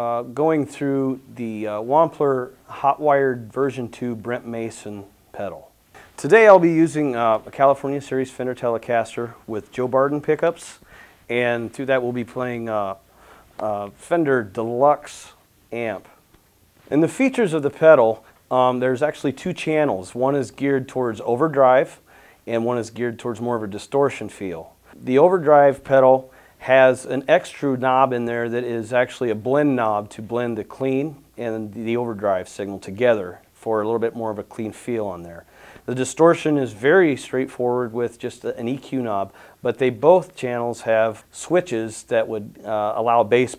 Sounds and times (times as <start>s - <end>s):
Speech: 0.0s - 13.0s, 13.6s - 16.2s, 16.9s - 43.5s.